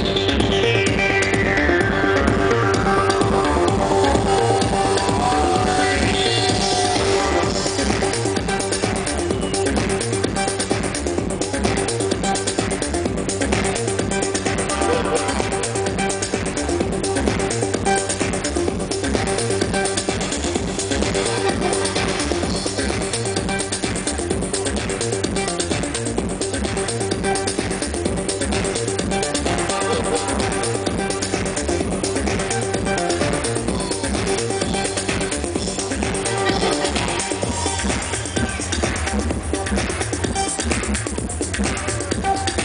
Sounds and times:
Music: 0.0s - 42.6s.

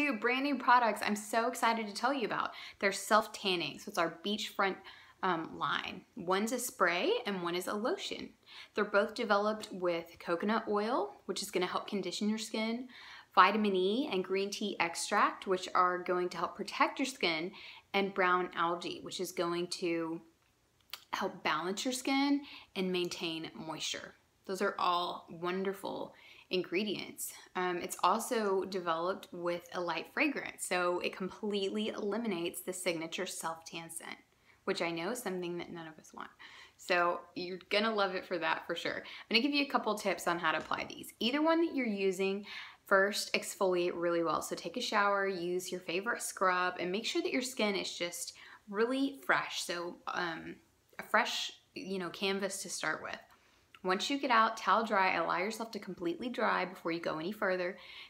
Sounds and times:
Speech: 0.0s - 20.3s, 21.0s - 57.8s.

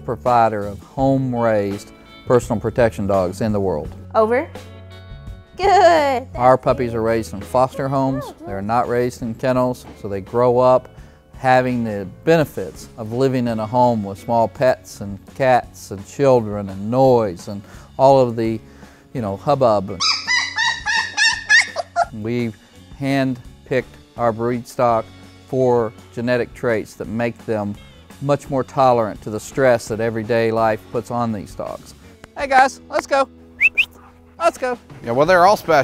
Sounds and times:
Music: 0.0s - 35.8s
Yip: 20.0s - 22.1s.

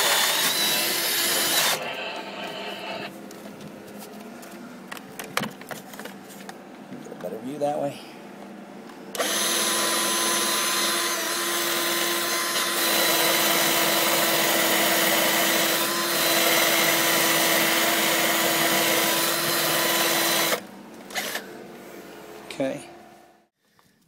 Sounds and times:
Power tool: 0.0s - 3.1s, 9.2s - 21.5s
Speech: 7.1s - 8.1s, 22.5s - 23.0s.

